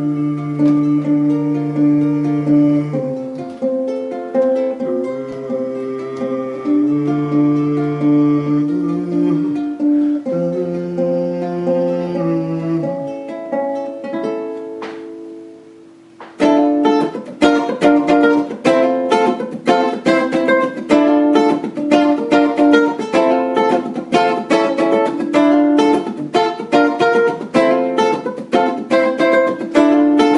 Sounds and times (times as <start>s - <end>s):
Guitar: 0.0s - 30.3s.